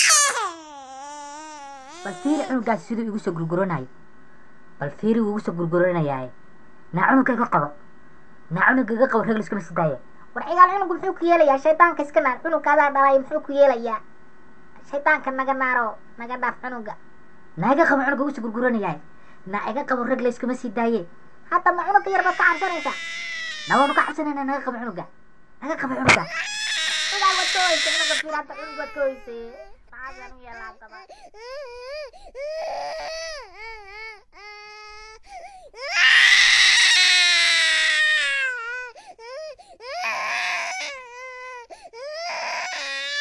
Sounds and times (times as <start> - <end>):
Speech: 2.0 - 3.9, 4.8 - 7.8, 8.5 - 14.0, 14.8 - 17.0, 17.6 - 23.0, 23.7 - 31.1.